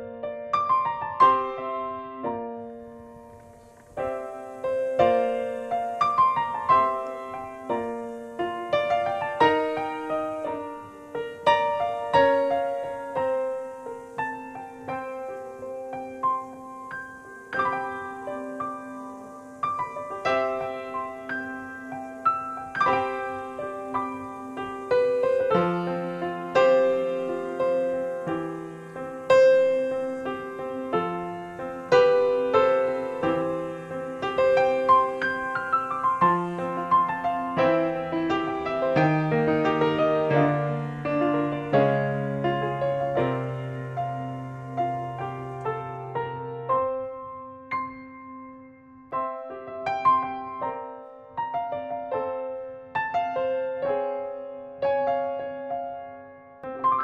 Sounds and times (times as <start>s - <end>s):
Electric piano: 0.0s - 57.0s.